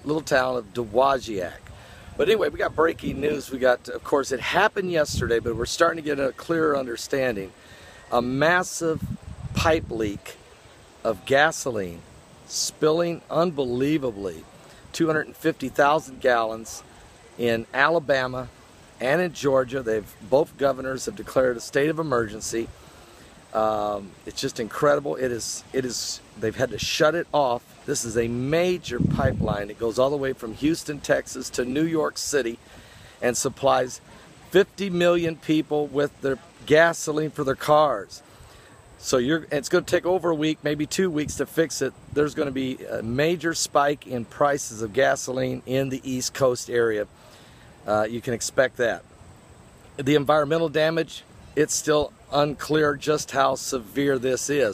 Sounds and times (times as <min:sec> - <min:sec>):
Speech: 0:00.0 - 0:07.5, 0:08.1 - 0:10.4, 0:11.0 - 0:22.8, 0:23.5 - 0:32.6, 0:33.2 - 0:38.2, 0:39.0 - 0:47.1, 0:47.8 - 0:49.0, 0:50.0 - 0:54.7.